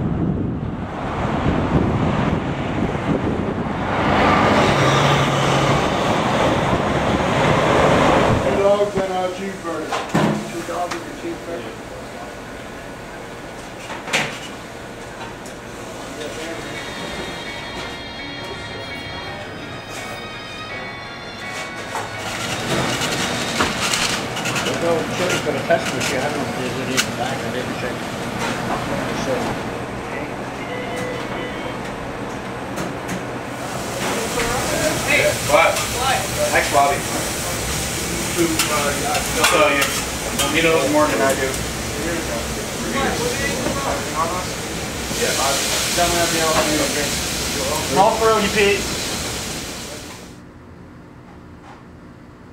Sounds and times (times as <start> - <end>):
Music: 17.2 - 23.0.